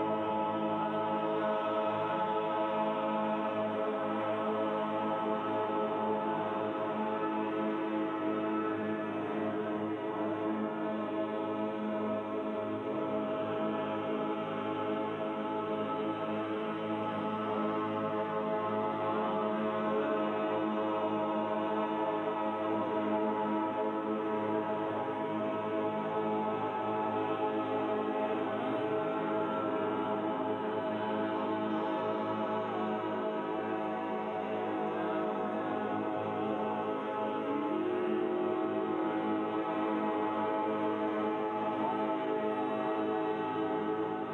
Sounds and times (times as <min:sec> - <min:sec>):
Music: 0:00.0 - 0:44.3.